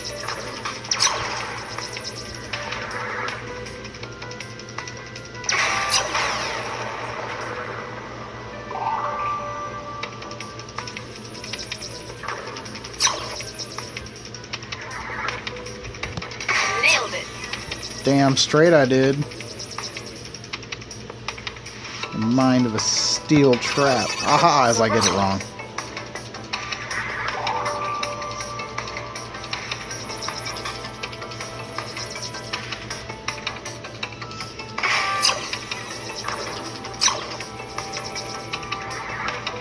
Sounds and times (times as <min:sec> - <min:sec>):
Music: 0:00.0 - 0:39.6
Speech: 0:22.2 - 0:25.4.